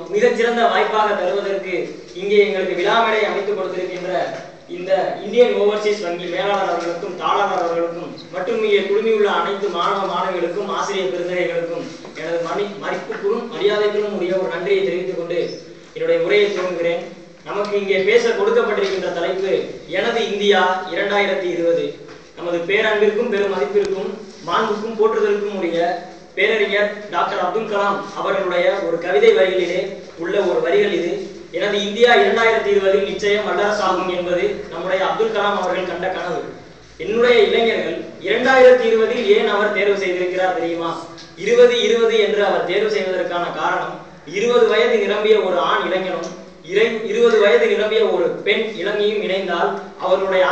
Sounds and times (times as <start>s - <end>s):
Male speech, man speaking: 0.0s - 50.5s
Narration, monologue: 0.0s - 50.5s.